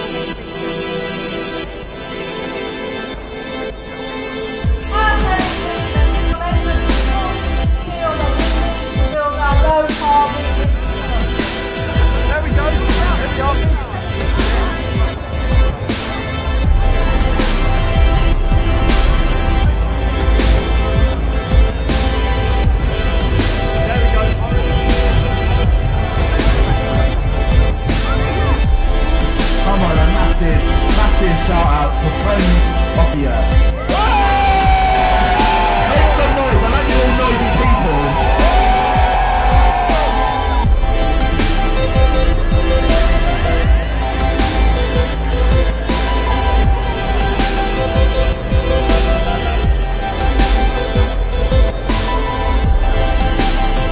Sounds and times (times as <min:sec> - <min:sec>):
Music: 0:00.0 - 0:53.9
Speech: 0:04.9 - 0:10.6, 0:12.2 - 0:15.1, 0:23.8 - 0:25.0, 0:29.5 - 0:34.2, 0:35.6 - 0:38.6.